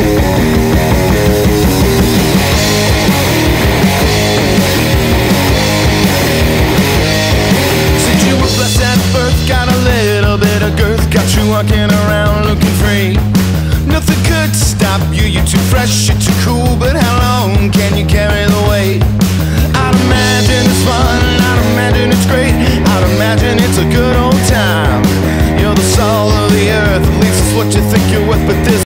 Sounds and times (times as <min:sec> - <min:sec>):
Electric guitar: 0:00.0 - 0:28.8.